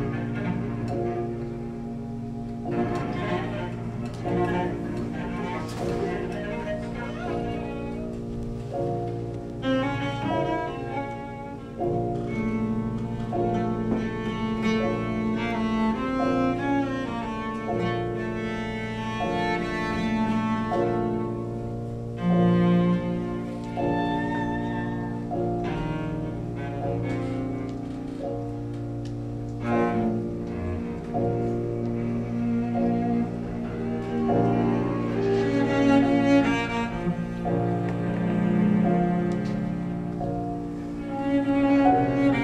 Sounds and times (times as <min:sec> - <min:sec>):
Cello: 0:00.0 - 0:42.4.